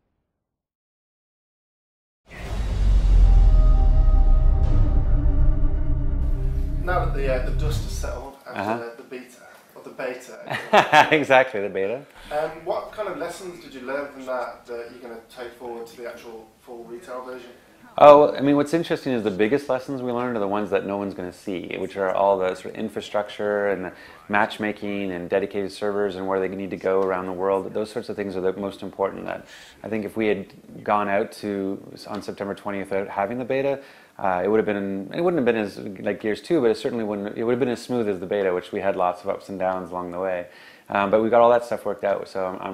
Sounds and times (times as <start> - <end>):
Speech: 6.8 - 42.7.